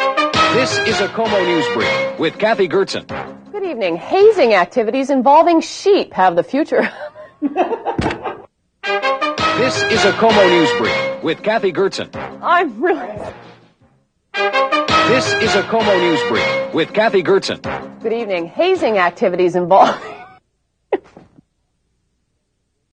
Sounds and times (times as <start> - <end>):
Music: 0.0 - 4.7, 8.8 - 20.4
Speech: 0.6 - 6.9, 9.6 - 13.3, 15.1 - 20.1.